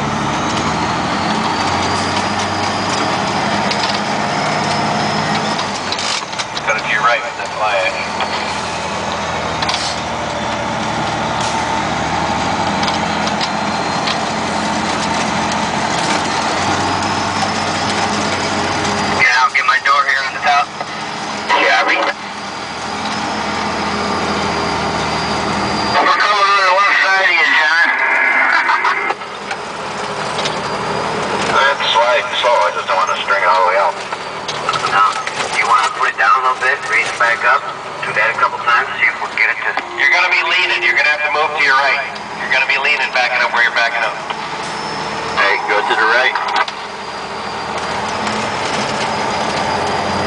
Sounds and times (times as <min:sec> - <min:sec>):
Speech: 0:06.7 - 0:08.1, 0:19.2 - 0:20.7, 0:21.5 - 0:22.2, 0:26.0 - 0:28.0, 0:31.5 - 0:34.0, 0:34.8 - 0:44.2, 0:45.4 - 0:46.5.